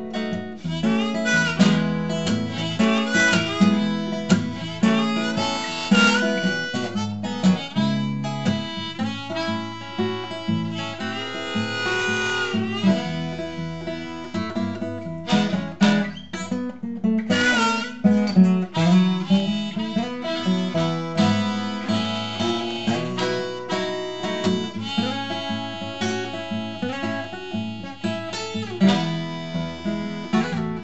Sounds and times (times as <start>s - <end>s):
Blues: 0.0s - 30.8s
Jazz: 0.0s - 30.8s.